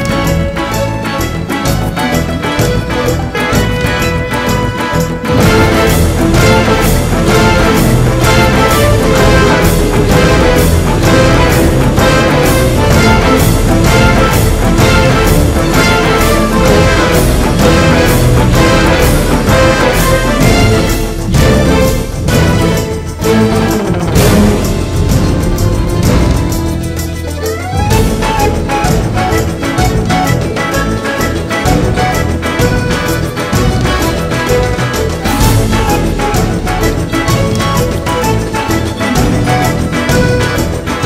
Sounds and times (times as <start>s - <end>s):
Soundtrack music: 0.0s - 41.0s.